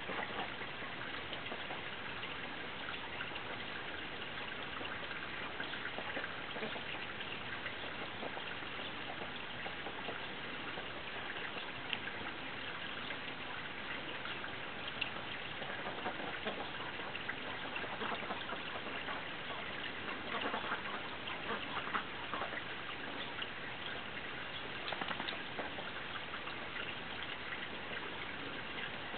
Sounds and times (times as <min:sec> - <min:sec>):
Quack: 0:06.1 - 0:06.9, 0:15.6 - 0:16.8, 0:17.5 - 0:22.6.